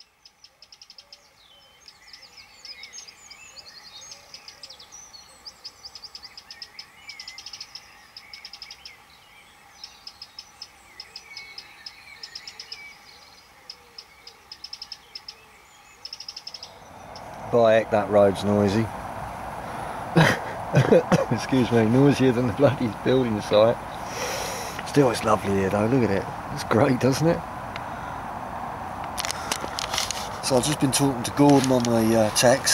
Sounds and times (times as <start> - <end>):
Chirp, tweet: 0.0 - 17.8.